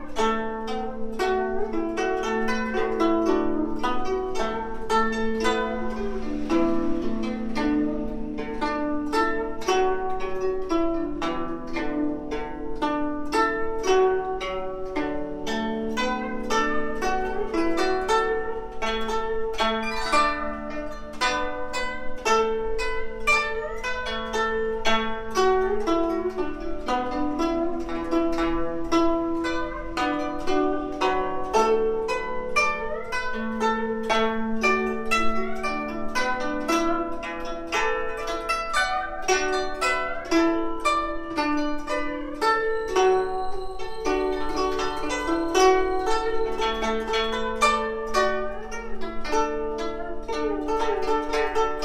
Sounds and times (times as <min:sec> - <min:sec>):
Traditional music: 0:00.0 - 0:51.8.